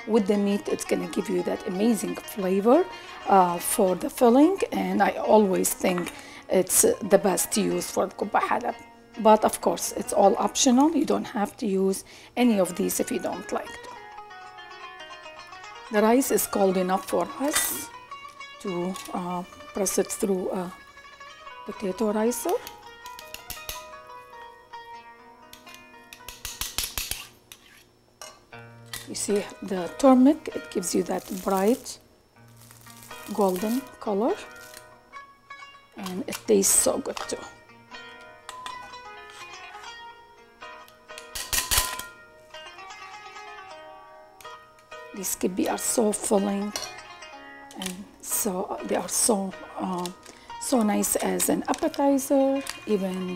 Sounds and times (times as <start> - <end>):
Music: 0.0 - 53.3
Speech: 0.1 - 13.8, 15.9 - 17.9, 18.6 - 20.8, 21.7 - 22.6, 29.1 - 32.0, 33.3 - 34.5, 36.0 - 37.5, 45.2 - 46.7, 47.8 - 53.3.